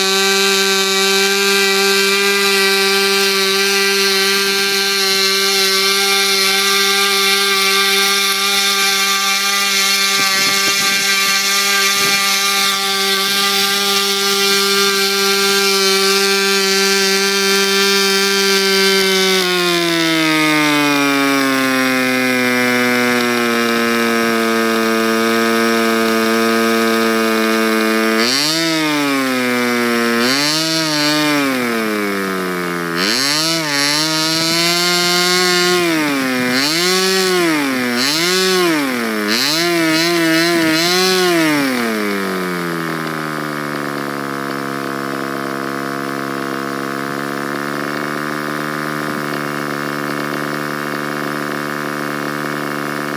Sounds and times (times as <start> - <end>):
Accelerating, revving, vroom: 0.0 - 42.3
Medium engine (mid frequency): 0.0 - 53.1.